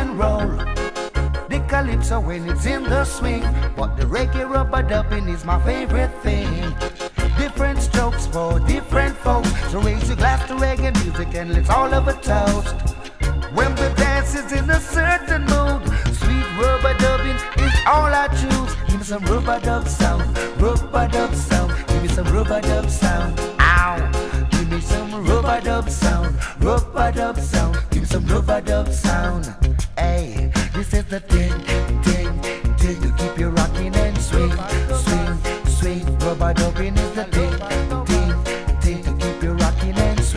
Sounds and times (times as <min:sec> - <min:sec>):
Reggae: 0:00.0 - 0:40.3.